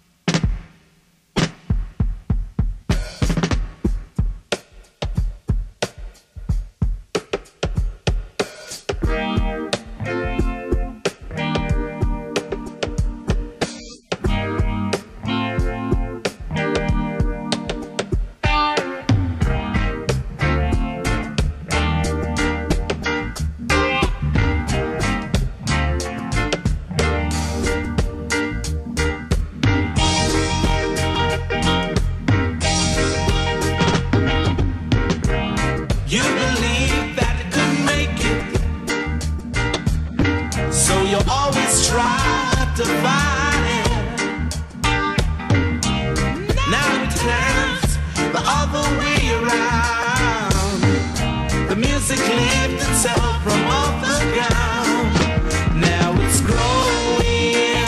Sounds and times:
Blues: 0:00.1 - 0:57.8
Pop music: 0:35.7 - 0:39.0, 0:40.2 - 0:45.0, 0:46.2 - 0:57.8.

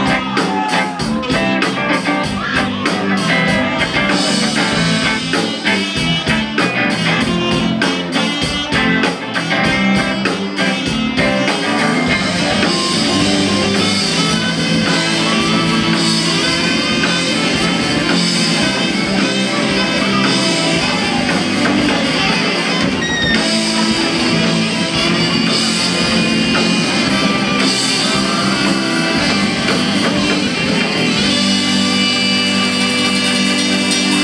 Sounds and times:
Inside, large room or hall: 0:00.0 - 0:34.2
Music: 0:00.0 - 0:34.2.

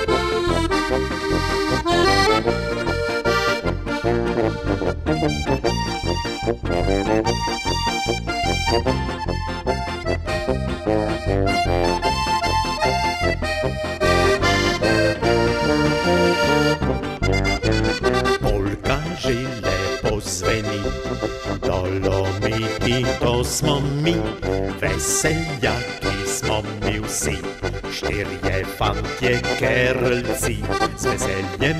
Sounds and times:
Accordion: 0:00.0 - 0:31.7.

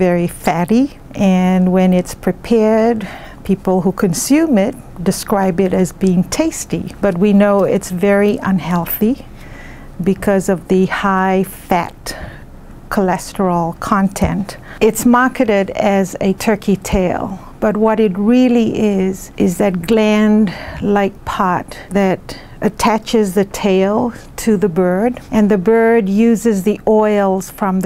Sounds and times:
Speech: 0:00.0 - 0:09.3, 0:10.0 - 0:12.3, 0:12.9 - 0:27.8.

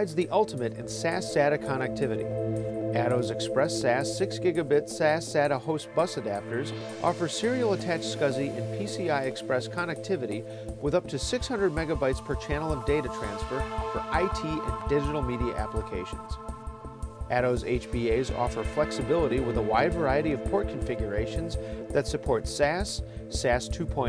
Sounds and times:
Speech: 0:00.0 - 0:02.2, 0:03.0 - 0:16.4, 0:17.3 - 0:24.0
Music: 0:00.0 - 0:24.0.

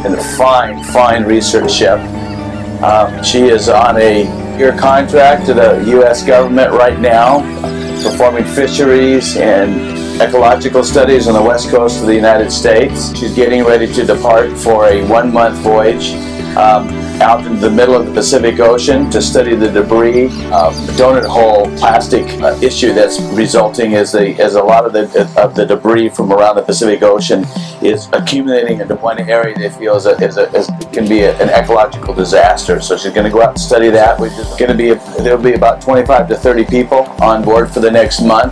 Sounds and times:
Speech: 0:00.0 - 0:02.0, 0:02.8 - 0:38.5
Music: 0:00.0 - 0:38.5.

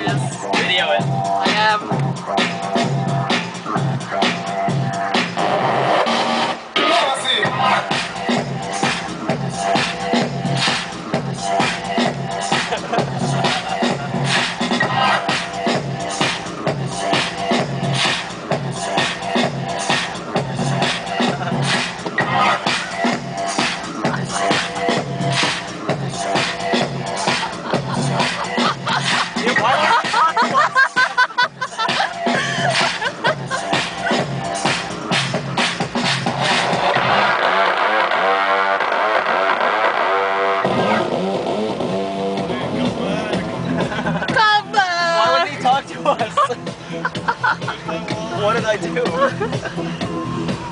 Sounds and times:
Music: 0:00.0 - 0:50.7.

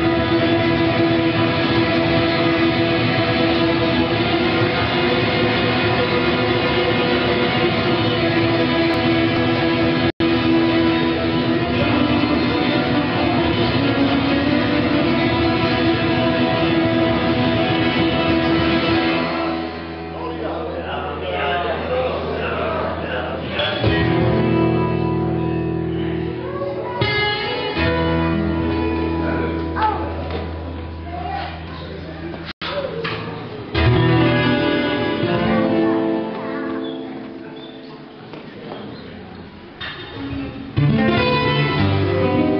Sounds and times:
Strum: 0:00.0 - 0:20.8, 0:23.4 - 0:38.2, 0:39.8 - 0:42.5
Bass guitar: 0:00.0 - 0:42.5
Speech: 0:20.1 - 0:24.1, 0:26.3 - 0:27.8, 0:28.7 - 0:33.8.

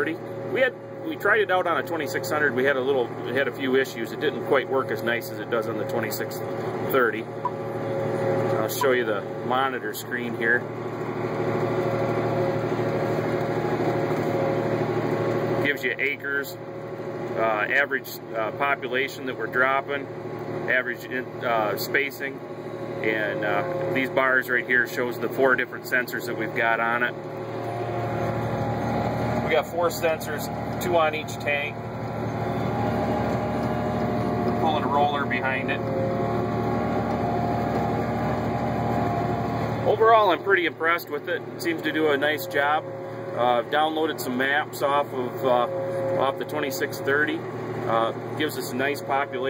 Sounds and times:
Speech: 0:00.0 - 0:07.3, 0:08.5 - 0:10.7, 0:15.6 - 0:16.6, 0:17.4 - 0:20.1, 0:20.7 - 0:22.4, 0:23.0 - 0:27.2, 0:29.4 - 0:31.8, 0:34.5 - 0:35.9, 0:39.8 - 0:49.5
Vehicle: 0:00.0 - 0:49.5.

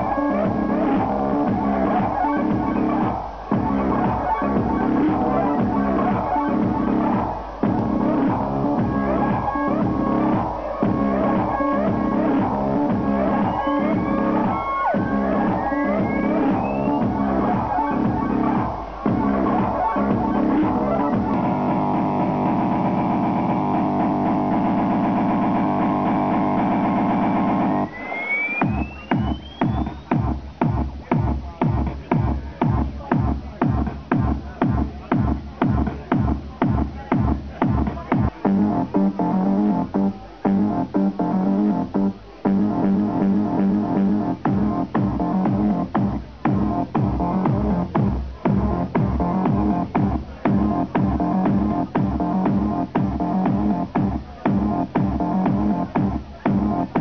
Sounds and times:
Inside, large room or hall: 0:00.0 - 0:57.0
Music: 0:00.0 - 0:57.0.

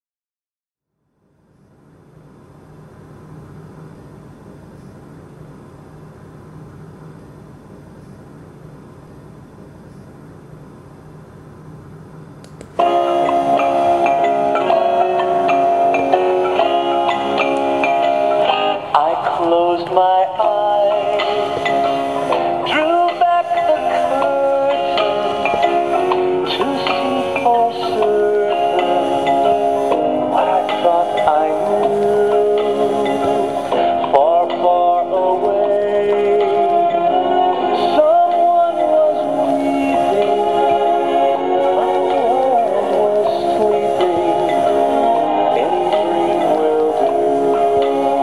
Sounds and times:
Music: 0:12.8 - 0:48.2
Male singing: 0:18.9 - 0:21.4, 0:22.6 - 0:25.6, 0:26.5 - 0:29.3, 0:30.3 - 0:33.4, 0:34.0 - 0:48.2.

